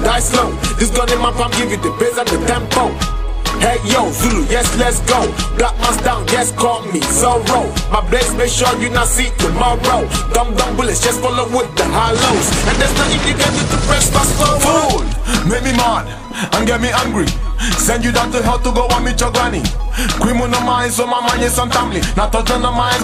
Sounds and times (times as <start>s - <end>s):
Dance music: 0.0s - 23.0s
Pop music: 0.0s - 23.0s.